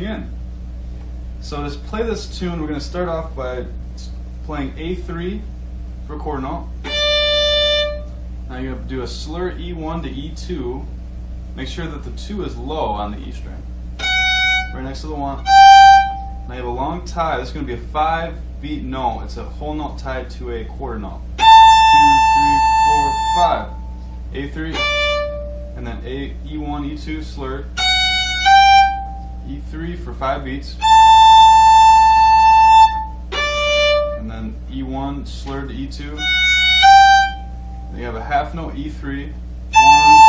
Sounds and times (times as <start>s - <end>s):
Speech: 0.0s - 0.4s, 1.4s - 5.5s, 6.1s - 6.8s, 8.5s - 11.0s, 11.6s - 13.7s, 14.7s - 15.5s, 16.5s - 25.0s, 25.8s - 27.8s, 29.4s - 30.8s, 34.1s - 36.3s, 37.9s - 40.2s
Violin, fiddle: 6.9s - 8.0s, 14.0s - 14.8s, 15.4s - 16.3s, 21.4s - 23.7s, 24.7s - 25.6s, 27.8s - 29.2s, 30.8s - 34.3s, 36.2s - 37.5s, 39.7s - 40.2s.